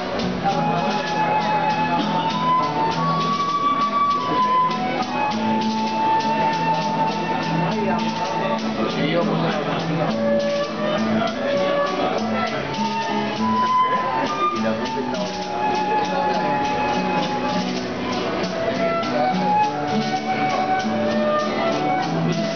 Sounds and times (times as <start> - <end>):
Flute: 0.0 - 22.5.